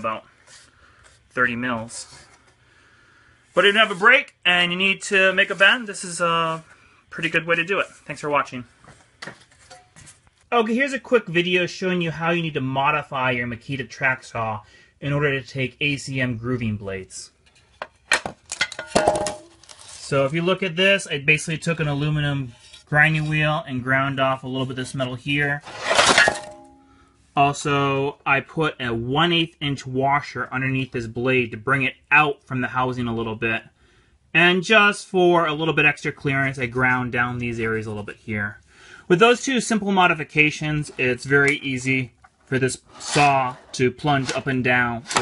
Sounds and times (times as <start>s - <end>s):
Speech: 0.0s - 0.3s, 1.3s - 2.3s, 3.6s - 8.7s, 10.5s - 17.4s, 20.0s - 25.6s, 27.4s - 33.7s, 34.3s - 45.2s.